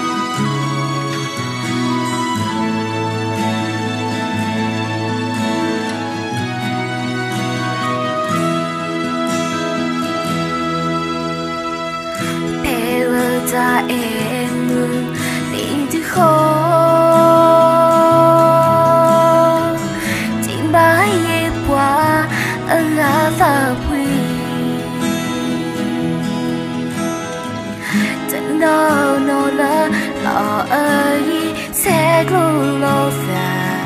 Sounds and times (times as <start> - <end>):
Music: 0.0 - 33.8.